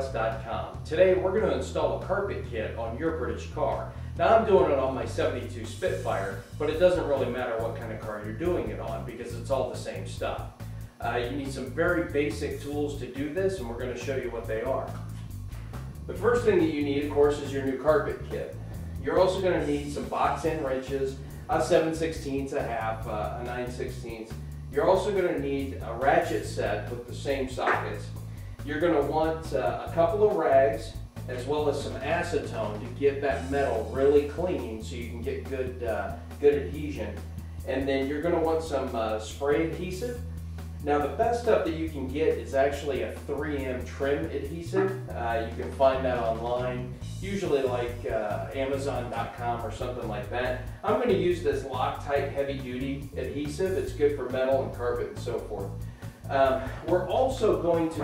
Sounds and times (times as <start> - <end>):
Speech: 0.0 - 15.1, 16.1 - 40.2, 40.8 - 58.0
Music: 0.0 - 58.0.